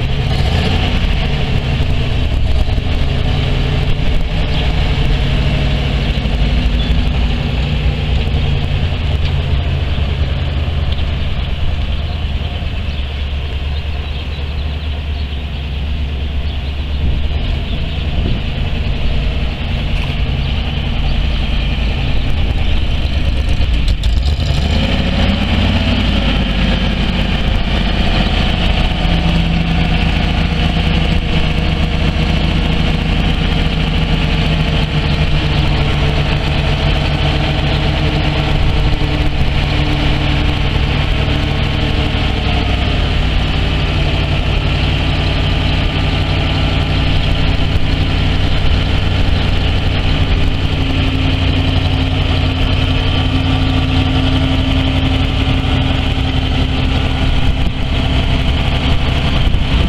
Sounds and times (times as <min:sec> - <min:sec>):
Truck: 0:00.0 - 0:59.8.